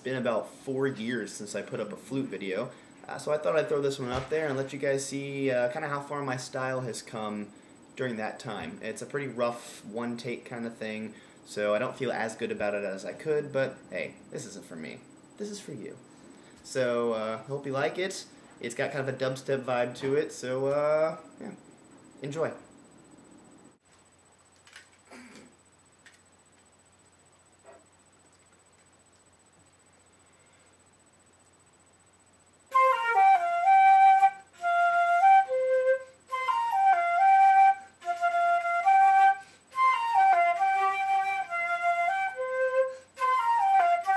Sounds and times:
Flute: 32.7 - 44.1.

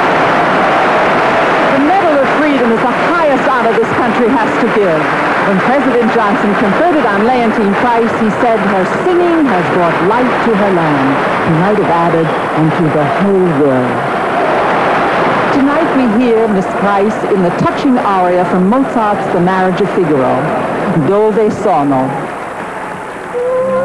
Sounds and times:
Speech: 1.7 - 14.0, 15.5 - 22.3.

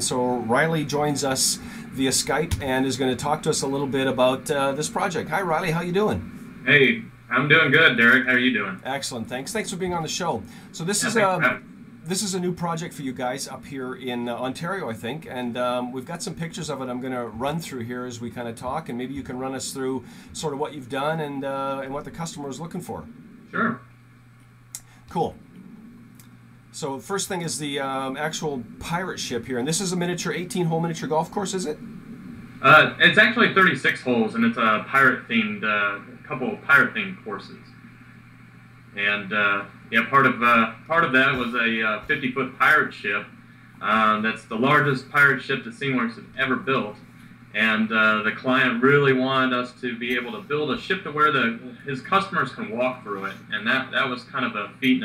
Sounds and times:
Speech: 0.0 - 23.8, 25.1 - 25.4, 26.8 - 31.8, 32.6 - 37.7, 39.0 - 47.0, 47.6 - 55.0.

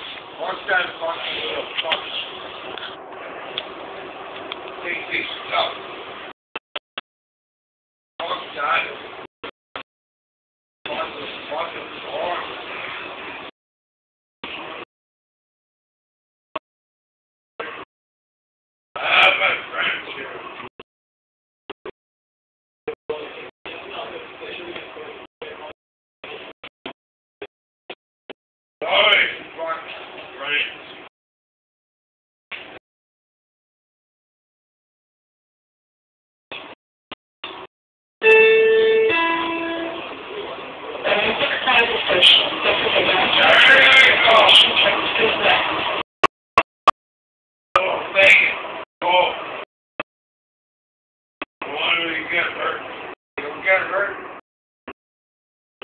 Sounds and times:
Train: 0.0 - 6.2, 10.9 - 13.2, 38.3 - 46.0
Speech: 0.4 - 2.3, 4.8 - 5.8, 8.2 - 9.0, 10.9 - 12.6, 19.0 - 20.5, 23.1 - 25.8, 28.8 - 30.8, 40.3 - 45.7, 47.8 - 49.4, 51.6 - 54.3.

